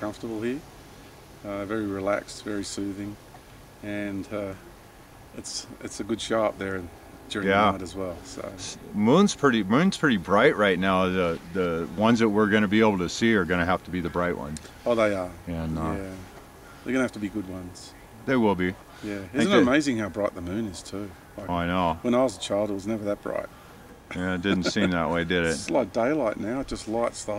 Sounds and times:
Speech: 0:00.0 - 0:00.6, 0:01.5 - 0:03.2, 0:03.8 - 0:04.6, 0:05.4 - 0:16.2, 0:16.9 - 0:23.5, 0:24.1 - 0:27.3.

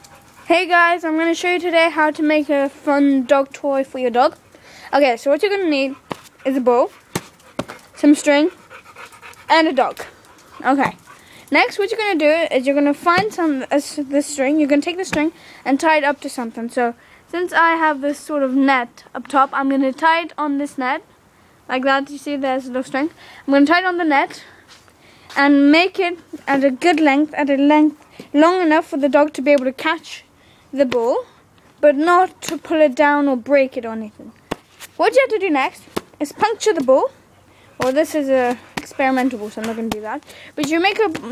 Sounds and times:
Speech: 0:00.5 - 0:06.9, 0:08.0 - 0:08.6, 0:09.5 - 0:21.0, 0:21.7 - 0:24.5, 0:25.3 - 0:34.3, 0:35.0 - 0:37.1, 0:37.8 - 0:41.3.

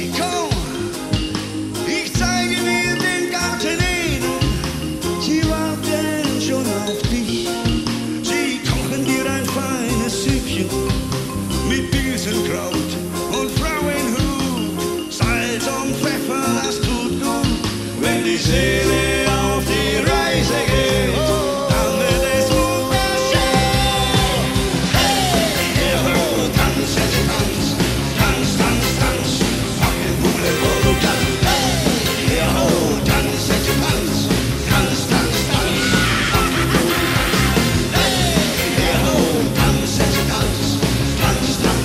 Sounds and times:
Progressive rock: 0:00.0 - 0:41.8
Ska: 0:00.0 - 0:41.8.

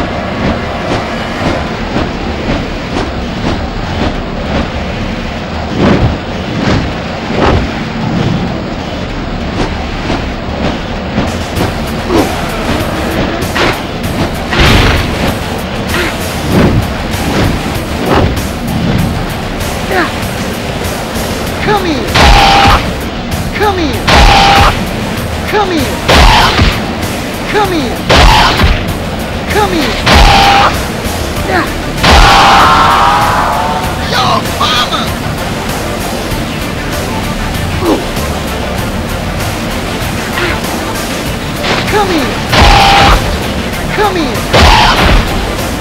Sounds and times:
Music: 0:09.0 - 0:45.8.

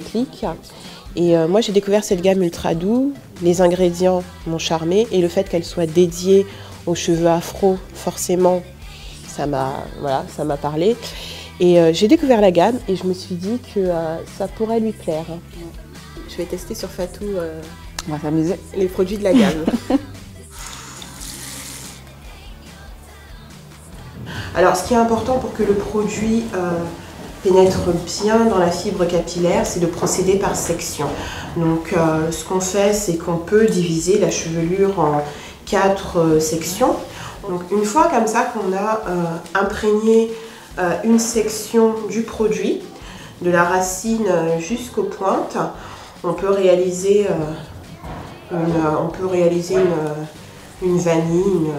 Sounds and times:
Speech: 0:00.0 - 0:00.6, 0:01.2 - 0:20.0, 0:24.4 - 0:47.7, 0:48.5 - 0:51.7
Music: 0:00.0 - 0:51.7.

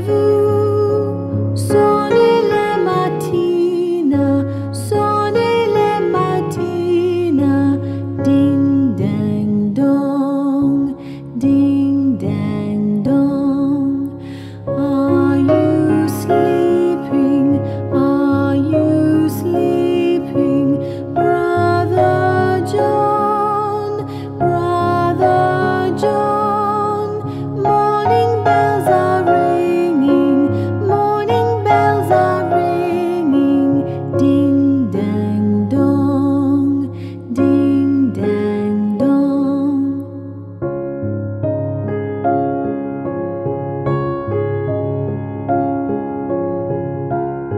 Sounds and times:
Lullaby: 0:00.0 - 0:40.6.

